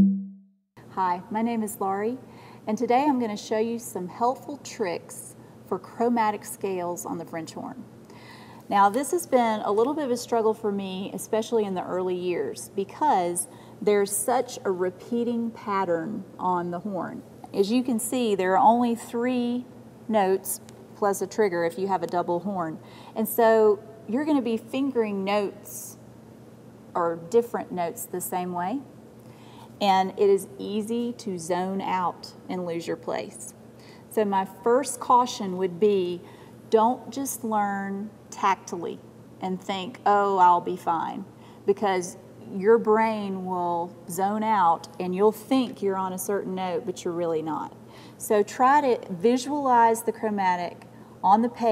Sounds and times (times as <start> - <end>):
Speech: 1.0 - 7.9, 8.7 - 26.0, 27.0 - 28.9, 29.8 - 33.6, 34.2 - 51.7.